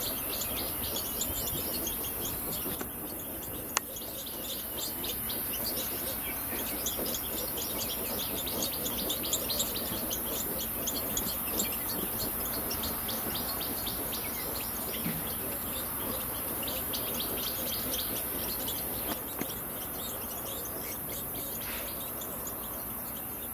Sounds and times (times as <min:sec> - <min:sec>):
Chirp, tweet: 0:00.0 - 0:23.5.